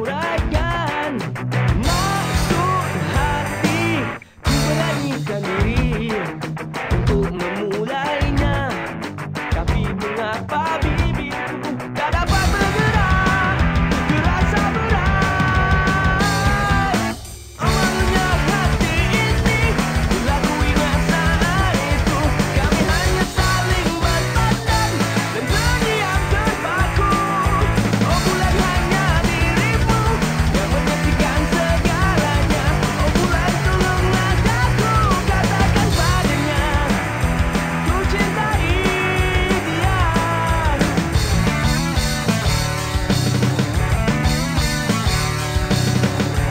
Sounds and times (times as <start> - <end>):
Music: 0.0 - 46.5.